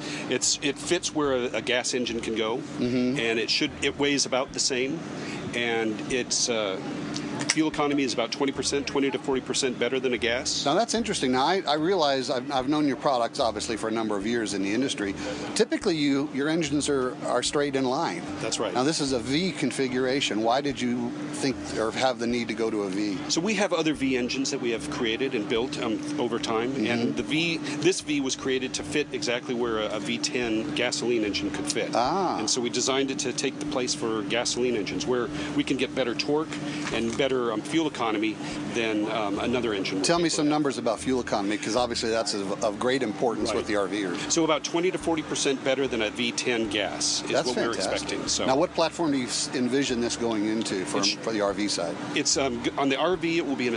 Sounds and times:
Speech: 0.3 - 53.7.

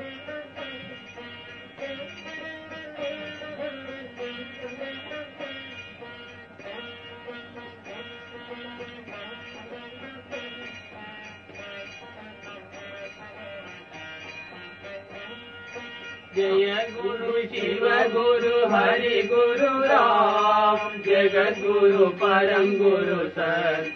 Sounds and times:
Music: 0.0 - 23.9.

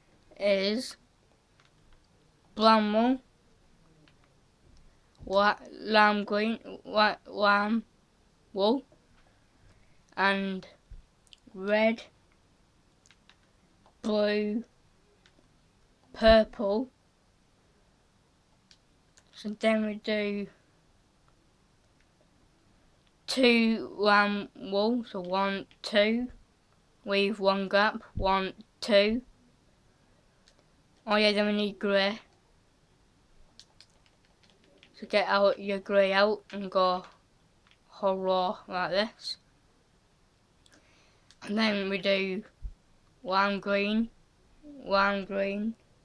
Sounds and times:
Speech: 0.4 - 1.0, 2.6 - 3.2, 5.2 - 7.9, 8.5 - 8.9, 10.2 - 10.8, 11.4 - 12.1, 14.0 - 14.7, 16.1 - 16.9, 19.2 - 20.6, 23.3 - 26.4, 27.1 - 29.3, 31.0 - 32.3, 34.9 - 37.2, 37.9 - 39.4, 41.4 - 42.6, 43.2 - 44.1, 44.7 - 45.8.

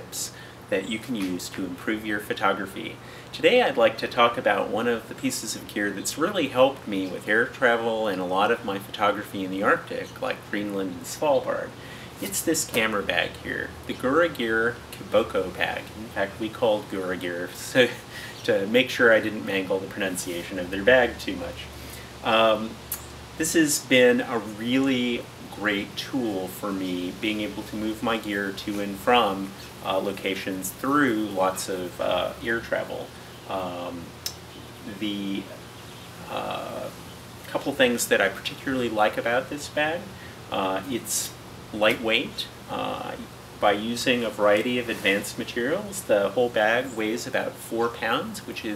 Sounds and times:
Speech: 0.0 - 35.6, 36.3 - 48.7.

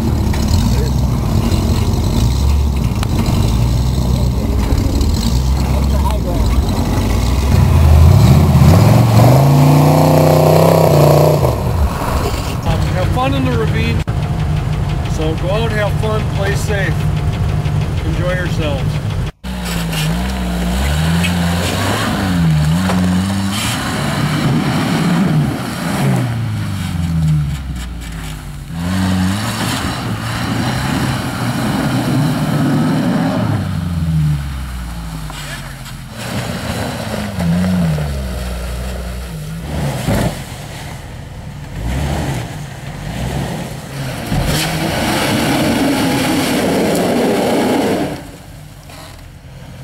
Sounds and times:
Speech: 5.6 - 6.8, 12.6 - 14.1, 15.1 - 17.0, 18.0 - 19.0.

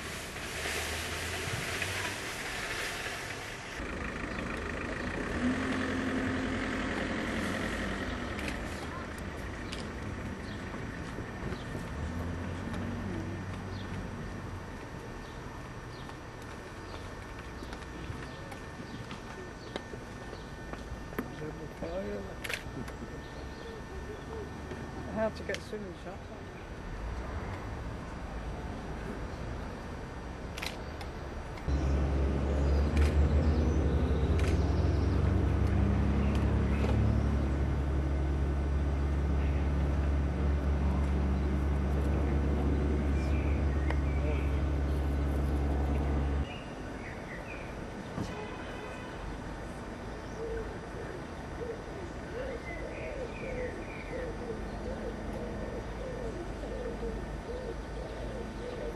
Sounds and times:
Speech: 21.2 - 22.4, 24.0 - 26.6.

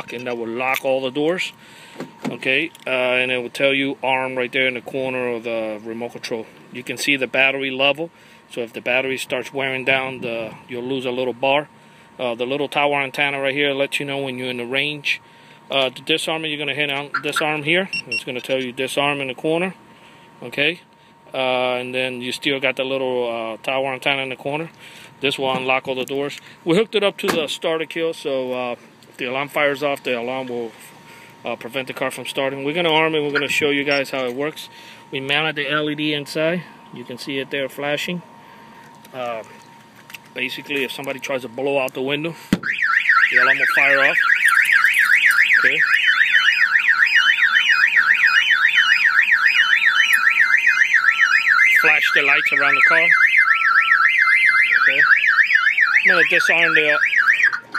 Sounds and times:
Car alarm: 13.0 - 19.7, 32.0 - 38.9, 42.6 - 57.7.

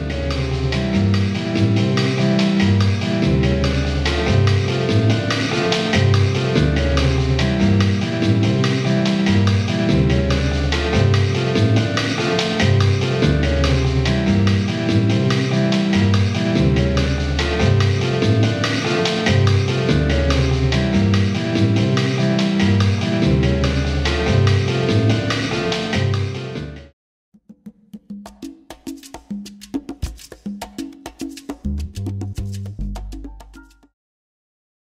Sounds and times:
Music: 0.0 - 34.0.

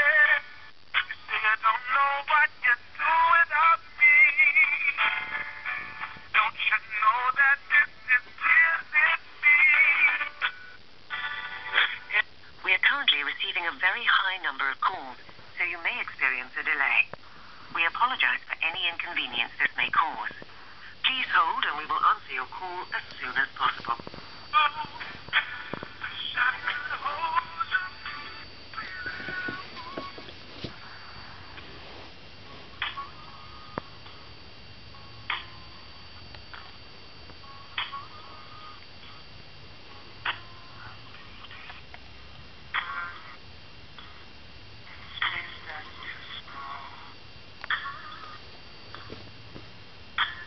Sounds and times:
Speech: 12.2 - 17.1, 17.7 - 20.4, 21.0 - 24.1.

